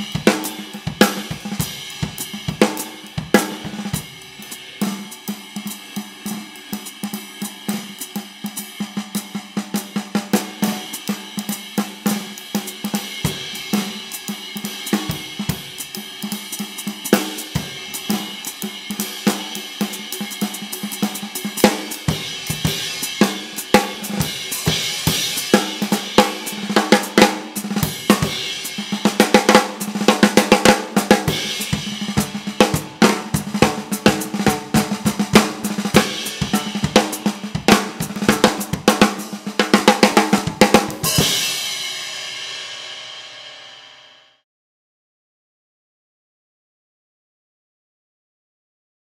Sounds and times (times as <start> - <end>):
Drum kit: 0.0 - 44.2.